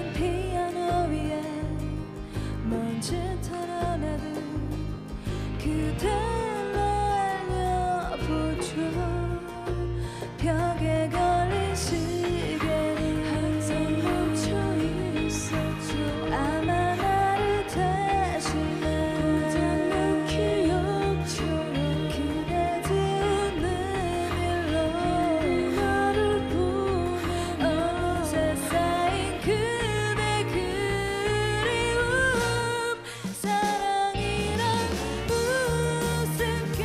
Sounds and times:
Music: 0:00.0 - 0:36.8.

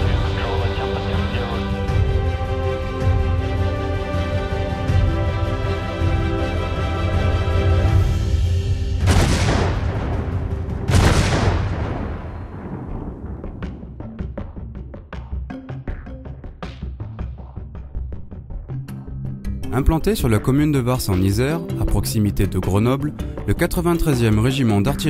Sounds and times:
Speech: 0:00.0 - 0:01.9, 0:19.7 - 0:25.0
Music: 0:00.0 - 0:25.0
Artillery fire: 0:09.0 - 0:14.0.

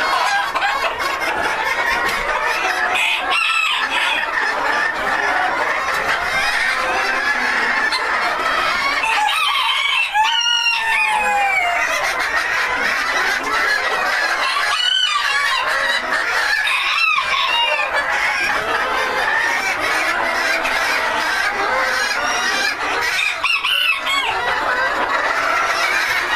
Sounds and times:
Cluck: 0:00.0 - 0:26.3
Crowing, cock-a-doodle-doo: 0:09.0 - 0:11.8.

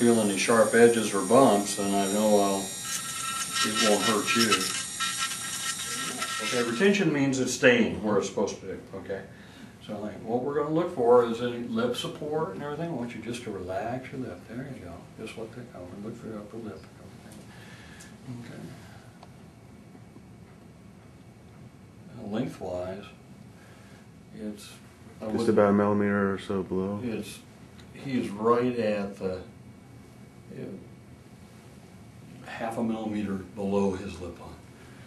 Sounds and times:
Electric shaver, electric razor: 0:00.0 - 0:07.0.

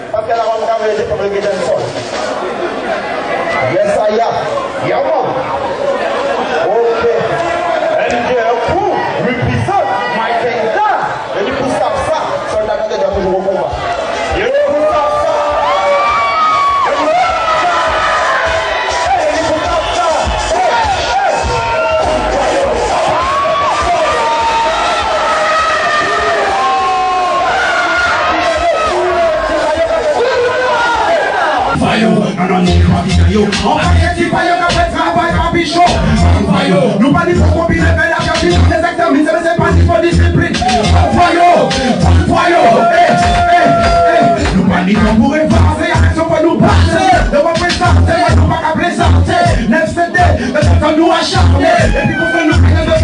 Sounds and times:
Cheering: 0:02.2 - 0:31.9, 0:40.5 - 0:49.6, 0:50.6 - 0:53.0
Music: 0:13.1 - 0:53.0.

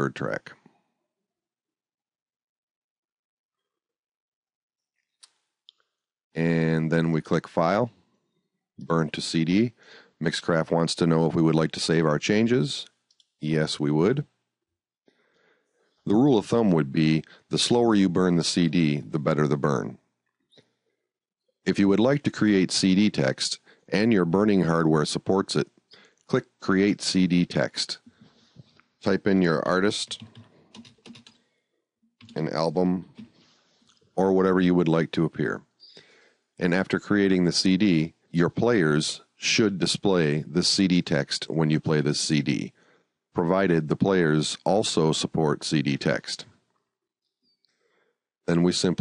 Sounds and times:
Computer keyboard: 0:30.0 - 0:31.4.

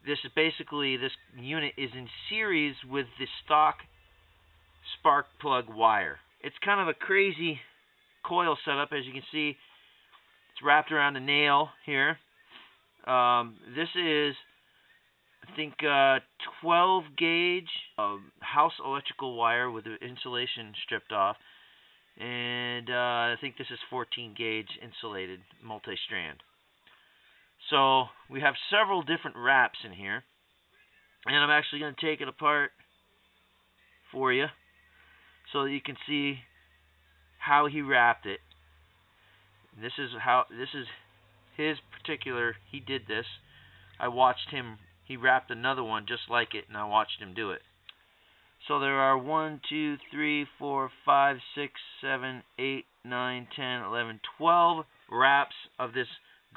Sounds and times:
Speech: 0:00.0 - 0:03.9, 0:04.8 - 0:09.6, 0:10.6 - 0:12.2, 0:13.0 - 0:14.5, 0:15.4 - 0:21.4, 0:22.2 - 0:26.4, 0:27.6 - 0:30.3, 0:31.2 - 0:32.8, 0:34.0 - 0:34.6, 0:35.5 - 0:36.6, 0:37.4 - 0:38.4, 0:39.8 - 0:43.4, 0:44.0 - 0:47.6, 0:48.6 - 0:56.5.

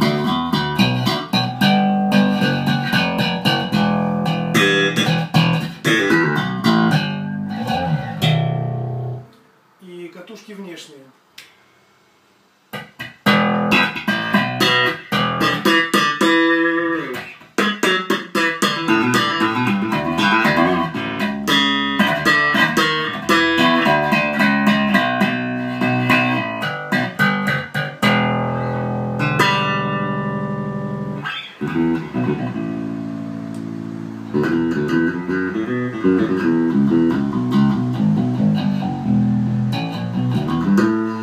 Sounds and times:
Bass guitar: 0:00.0 - 0:09.4, 0:12.7 - 0:41.2
Electric guitar: 0:00.0 - 0:09.5, 0:12.7 - 0:41.2
Tapping (guitar technique): 0:00.0 - 0:09.5, 0:12.7 - 0:41.2.

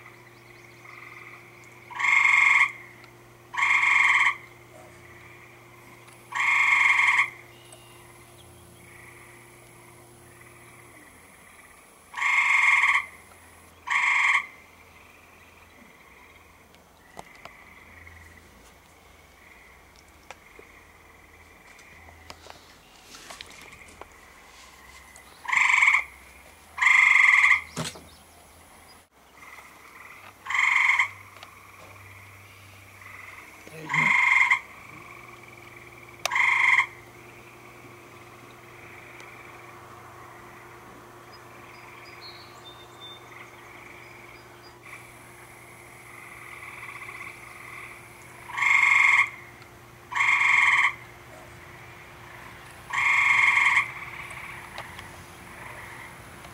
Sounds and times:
Frog: 0:00.0 - 0:08.2, 0:08.8 - 0:18.5, 0:19.2 - 0:22.4, 0:23.4 - 0:27.8, 0:29.3 - 0:42.5, 0:43.3 - 0:56.5.

